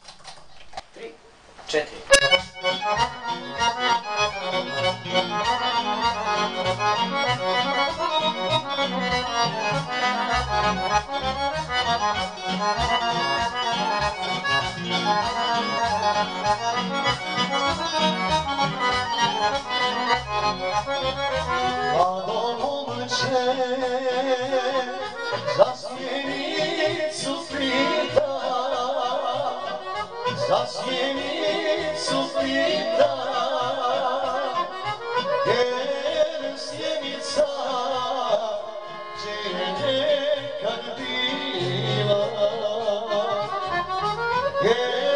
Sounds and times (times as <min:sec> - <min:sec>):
Speech: 0:01.0 - 0:02.2
Accordion: 0:01.9 - 0:45.1.